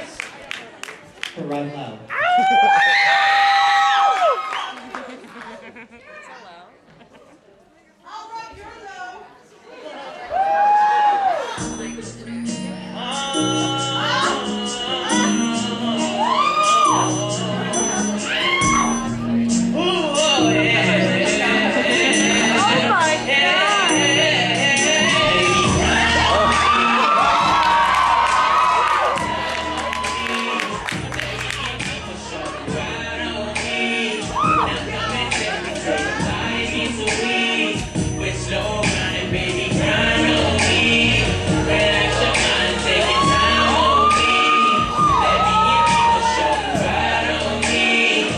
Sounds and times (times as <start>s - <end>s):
Male singing: 11.6s - 18.9s, 19.6s - 28.4s, 29.1s - 48.3s
Pop music: 11.6s - 48.3s.